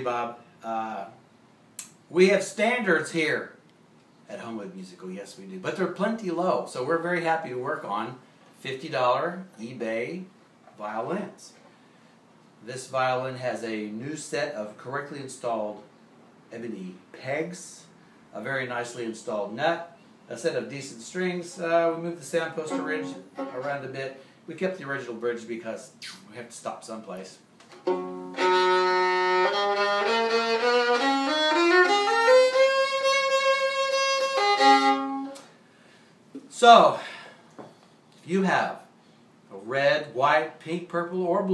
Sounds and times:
Speech: 0:00.0 - 0:01.2, 0:02.1 - 0:03.6, 0:04.3 - 0:11.6, 0:12.6 - 0:15.9, 0:16.5 - 0:27.5, 0:36.4 - 0:37.2, 0:38.2 - 0:38.9, 0:39.5 - 0:41.5
Violin, fiddle: 0:22.6 - 0:24.0, 0:27.8 - 0:35.4.

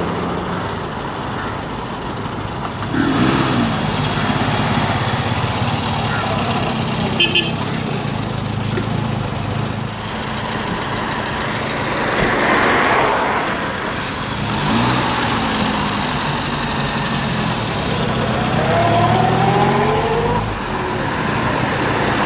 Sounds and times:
Car: 0:00.0 - 0:22.2.

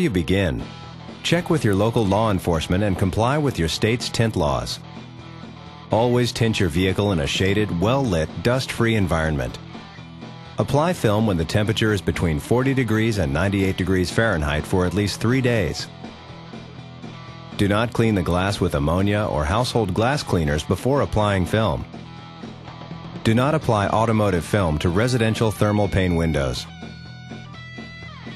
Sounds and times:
Speech: 0:00.0 - 0:04.8, 0:05.9 - 0:09.6, 0:10.6 - 0:15.9, 0:17.6 - 0:21.9, 0:23.2 - 0:26.7
Music: 0:00.0 - 0:28.3.

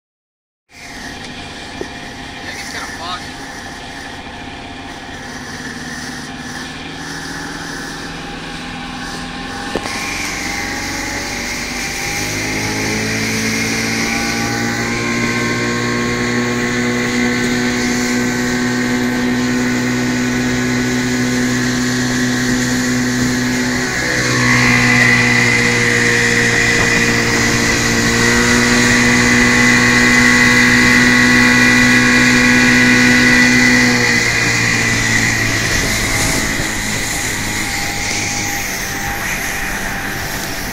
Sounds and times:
Motorboat, speedboat: 0:00.7 - 0:40.7
Speech: 0:02.4 - 0:03.4.

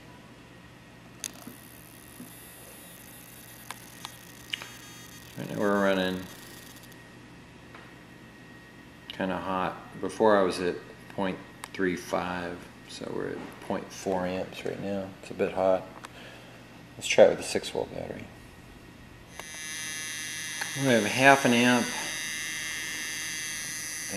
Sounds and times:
Speech: 0:05.4 - 0:06.3, 0:09.1 - 0:15.9, 0:17.0 - 0:18.3, 0:20.8 - 0:22.1.

